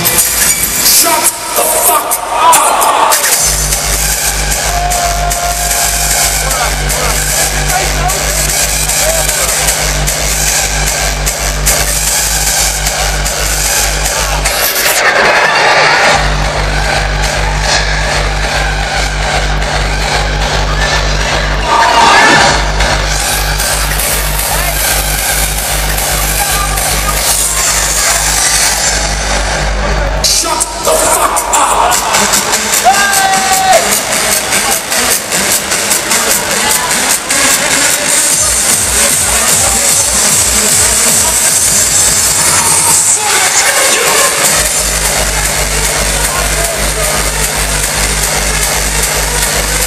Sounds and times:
Crowd: 0.0s - 49.8s.

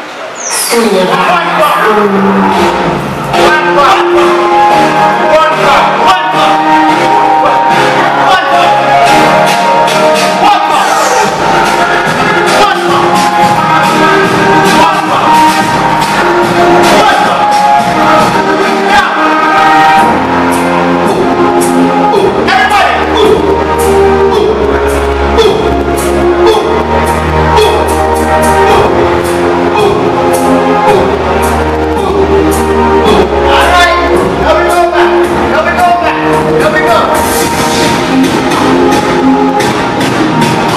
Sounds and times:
Speech: 0.5s - 2.4s, 3.4s - 4.4s, 5.1s - 9.0s, 10.3s - 11.2s, 12.5s - 13.3s, 16.8s - 17.5s, 18.7s - 19.3s, 22.1s - 23.4s, 25.4s - 25.8s, 29.8s - 30.1s, 32.0s - 32.3s, 33.0s - 37.2s
Music: 0.8s - 40.7s.

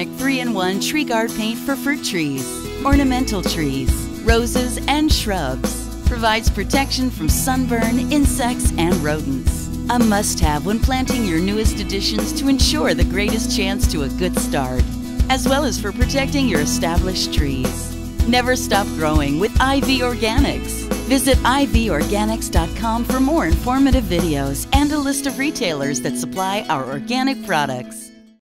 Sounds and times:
Speech: 0.0s - 28.1s
Music: 0.0s - 28.4s.

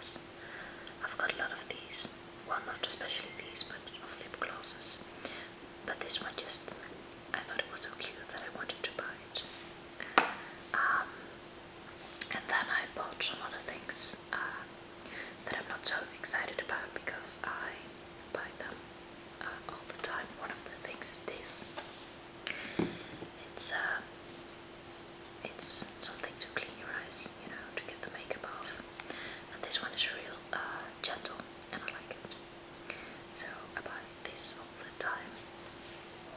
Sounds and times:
Whispering: 0.0s - 0.3s, 0.9s - 5.1s, 5.9s - 9.6s, 10.7s - 11.2s, 12.2s - 14.7s, 15.4s - 18.8s, 19.4s - 21.8s, 23.4s - 24.1s, 25.4s - 28.9s, 29.5s - 32.4s, 33.3s - 35.4s.

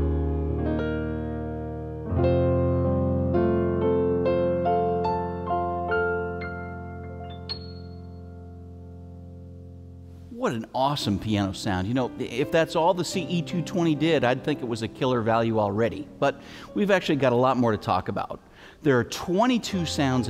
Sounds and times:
Electric piano: 0.0s - 18.6s
Speech: 10.3s - 20.2s.

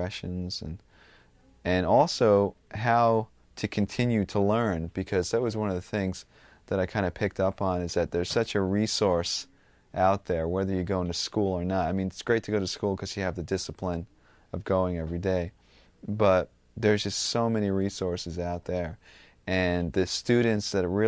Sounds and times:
Speech: 0.0s - 0.8s, 1.6s - 21.0s.

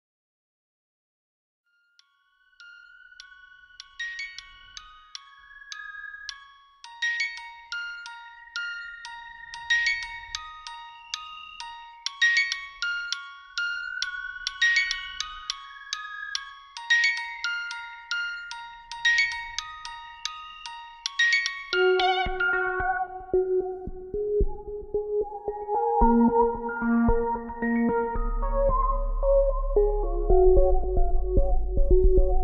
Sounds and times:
Glockenspiel: 1.7s - 32.4s.

